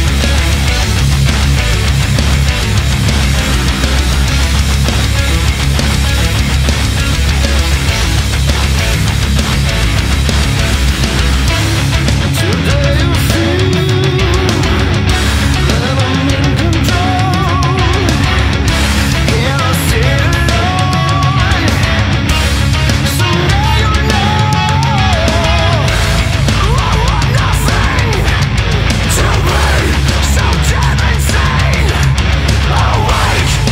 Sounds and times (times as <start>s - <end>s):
Music: 0.0s - 33.7s.